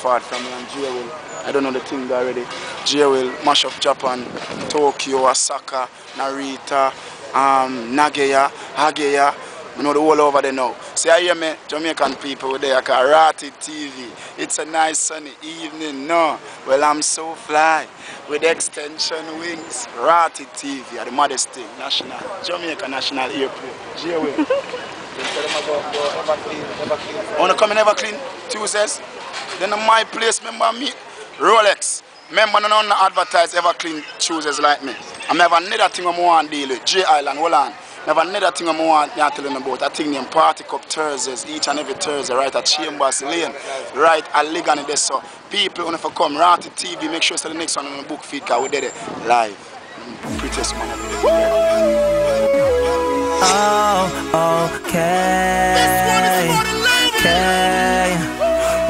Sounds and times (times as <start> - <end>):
Speech: 0.0 - 24.5, 25.1 - 52.6.